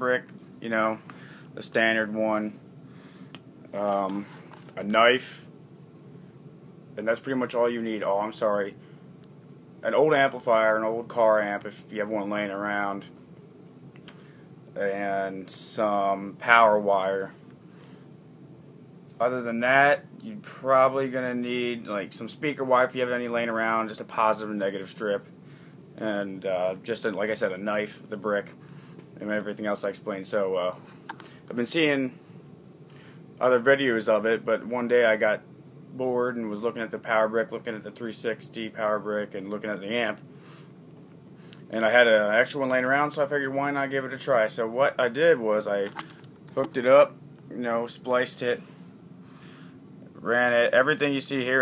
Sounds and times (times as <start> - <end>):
Speech: 0.0 - 1.0, 1.6 - 2.6, 3.7 - 5.5, 7.0 - 8.8, 9.8 - 13.2, 14.8 - 17.4, 19.2 - 25.3, 26.0 - 28.6, 29.2 - 30.8, 31.5 - 32.2, 33.4 - 40.2, 41.7 - 46.0, 46.6 - 48.6, 50.2 - 51.6.